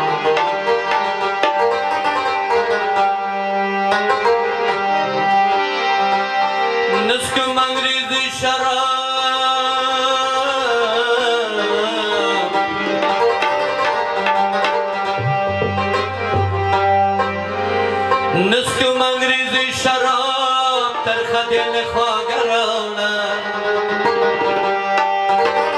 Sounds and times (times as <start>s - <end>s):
Middle Eastern music: 0.0s - 25.7s.